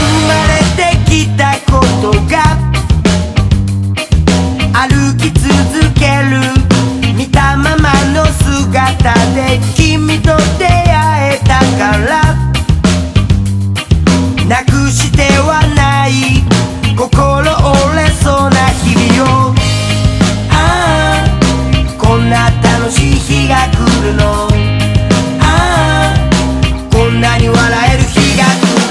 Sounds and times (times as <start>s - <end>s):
Music: 0.0s - 28.9s.